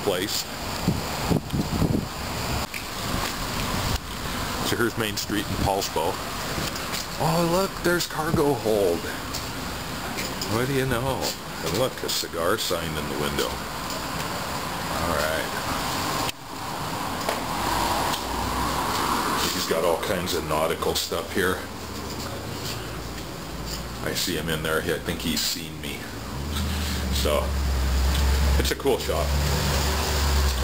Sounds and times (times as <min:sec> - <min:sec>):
Speech: 0:00.0 - 0:00.5, 0:04.6 - 0:06.2, 0:07.2 - 0:09.2, 0:10.4 - 0:13.6, 0:14.9 - 0:15.6, 0:19.4 - 0:21.7, 0:24.0 - 0:26.2, 0:27.1 - 0:27.6, 0:28.6 - 0:29.4
Outside, urban or manmade: 0:00.0 - 0:30.6.